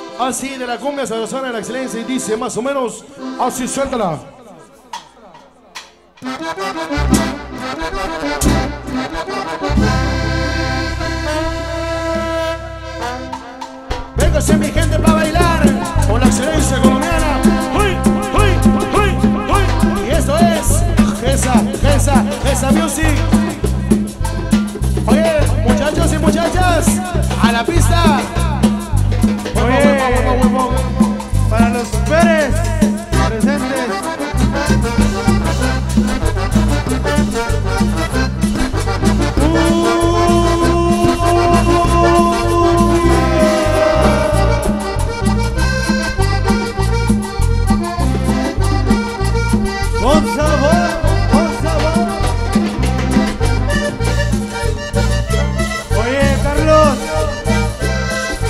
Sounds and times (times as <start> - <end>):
Accordion: 0.0 - 58.4
Speech: 0.2 - 6.0, 14.2 - 24.0, 25.1 - 28.7, 29.5 - 34.3, 39.4 - 44.8, 50.0 - 52.2, 55.9 - 57.4.